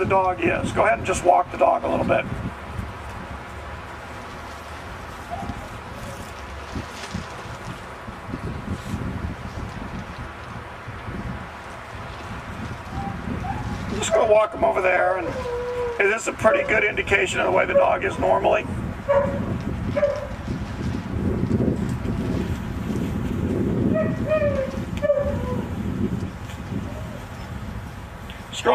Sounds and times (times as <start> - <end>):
Speech: 0.0 - 2.3, 13.9 - 15.4, 16.0 - 18.7, 28.5 - 28.7.